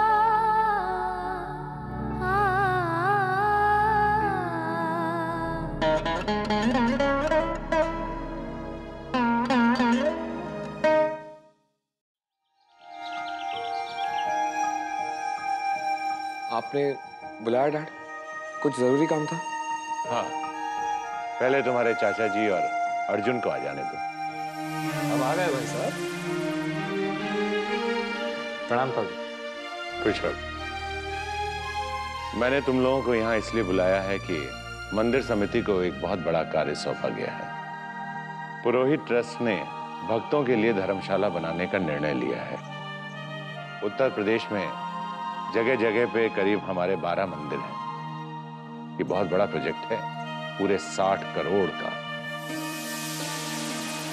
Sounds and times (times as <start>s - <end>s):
Sitar: 12.5s - 48.1s, 48.7s - 54.1s.